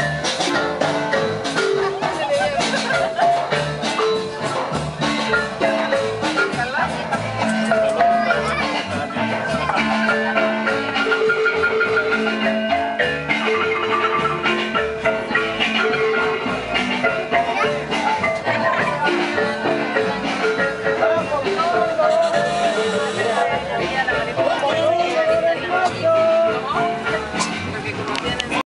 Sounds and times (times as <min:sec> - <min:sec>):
Music: 0:00.0 - 0:28.6
Speech: 0:01.8 - 0:05.1, 0:05.9 - 0:11.0, 0:15.1 - 0:28.6.